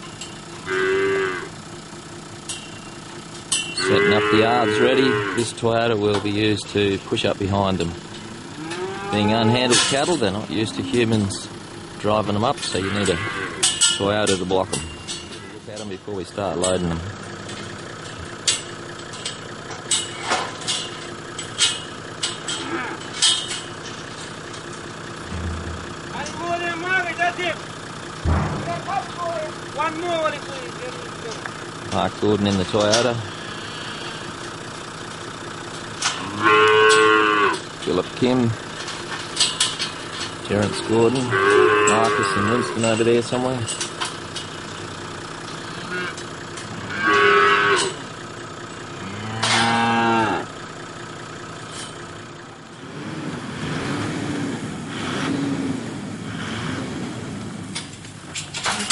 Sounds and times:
Speech: 0:03.8 - 0:08.0, 0:09.1 - 0:13.3, 0:14.0 - 0:14.8, 0:15.5 - 0:17.1, 0:26.1 - 0:27.6, 0:28.6 - 0:33.3, 0:37.8 - 0:38.6, 0:40.4 - 0:43.8.

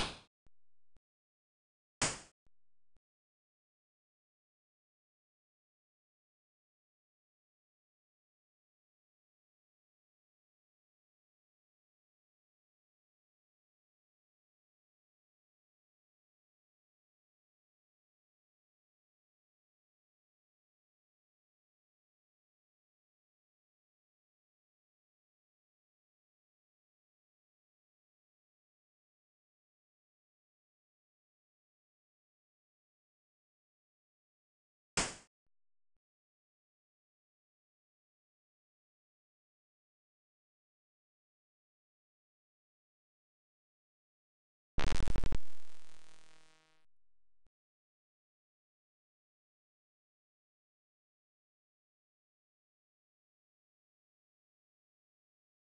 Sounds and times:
Silence: 0:44.8 - 0:47.5.

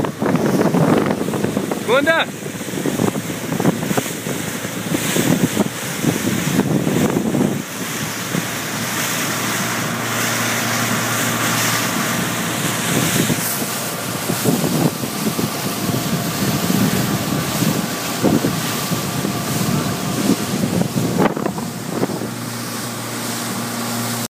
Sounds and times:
Sailboat, sailing ship: 0:00.0 - 0:24.3.

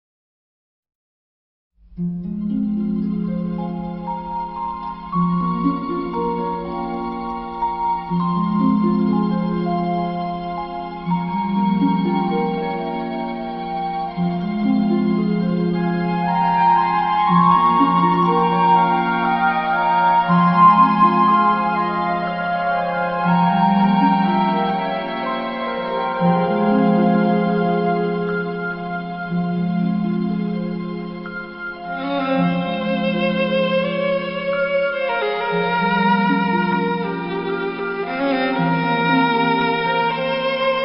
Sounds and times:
Violin, fiddle: 0:03.4 - 0:40.8.

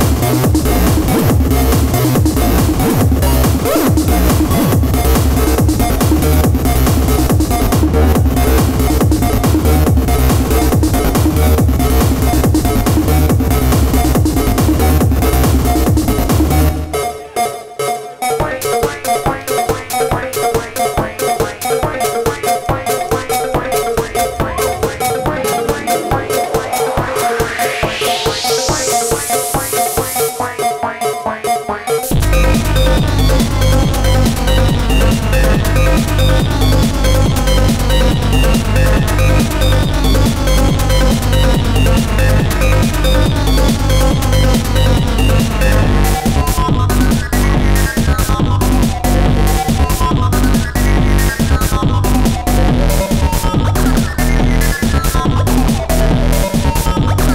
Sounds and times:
Trance music: 0:00.0 - 0:46.1.

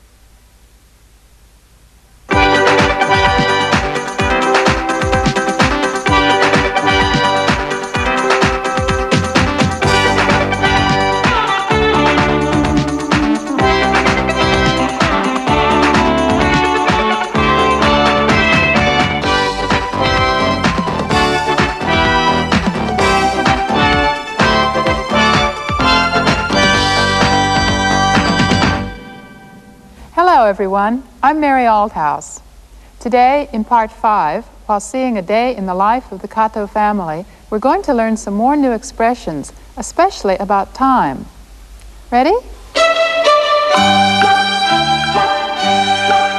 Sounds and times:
Music: 0:02.3 - 0:30.8, 0:42.7 - 0:46.3
Speech: 0:30.2 - 0:32.4, 0:33.0 - 0:41.3, 0:42.1 - 0:42.6.

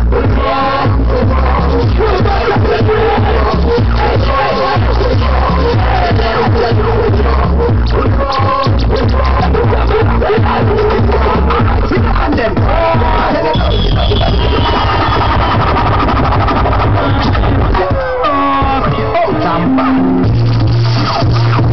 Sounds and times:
Music: 0:00.0 - 0:21.7.

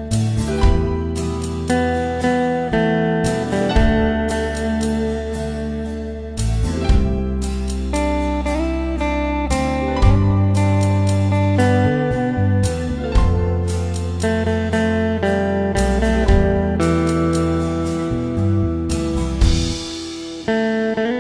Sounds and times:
Acoustic guitar: 0:00.0 - 0:21.2.

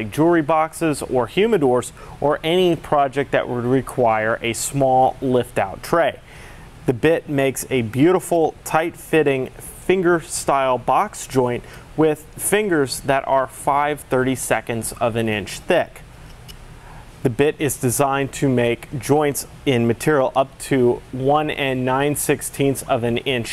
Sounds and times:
Speech: 0:00.0 - 0:06.2, 0:06.9 - 0:16.0, 0:17.2 - 0:23.5.

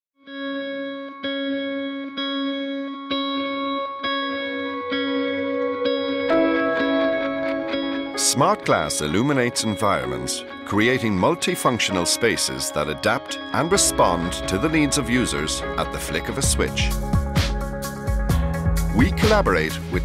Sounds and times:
Music: 0:00.2 - 0:20.0
Speech: 0:08.2 - 0:17.0, 0:18.9 - 0:20.0.

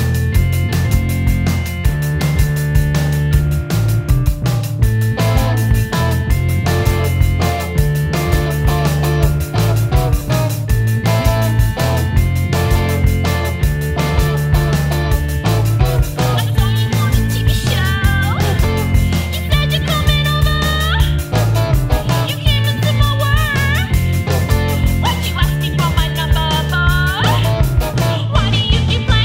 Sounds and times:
Music: 0:00.0 - 0:29.2.

